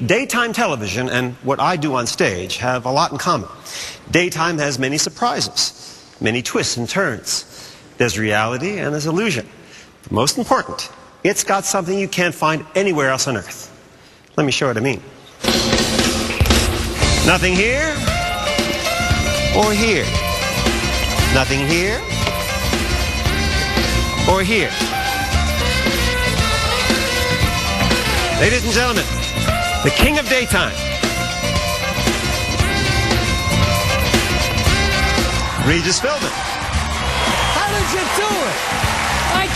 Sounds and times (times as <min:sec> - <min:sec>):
Speech: 0:00.0 - 0:03.5, 0:04.1 - 0:09.5, 0:10.1 - 0:13.7, 0:14.4 - 0:15.1, 0:17.2 - 0:18.0, 0:19.6 - 0:20.1, 0:21.3 - 0:22.0, 0:24.3 - 0:24.8, 0:28.4 - 0:29.1, 0:29.8 - 0:30.8
Music: 0:15.4 - 0:39.5.